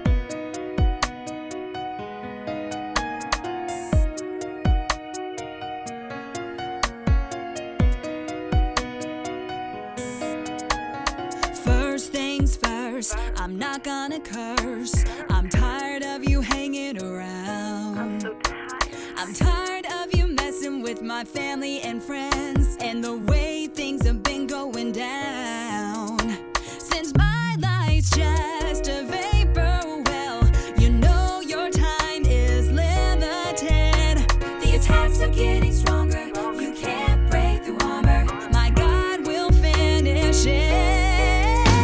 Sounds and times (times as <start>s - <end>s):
Music: 0.0s - 41.8s.